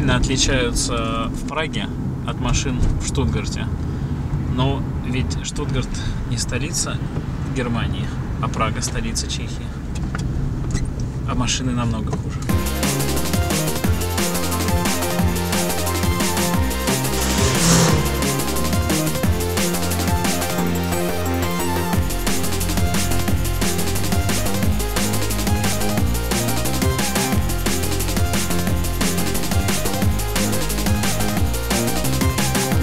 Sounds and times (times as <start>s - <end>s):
Speech: 0.0s - 3.7s, 4.5s - 7.0s, 7.6s - 9.8s, 11.3s - 12.2s
Music: 12.5s - 32.8s.